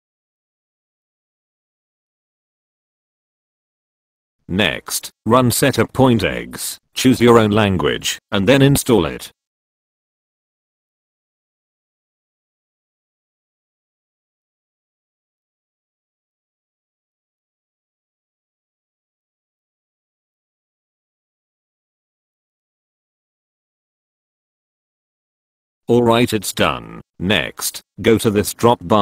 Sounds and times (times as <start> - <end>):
Speech synthesizer: 4.5 - 9.4, 25.9 - 29.0.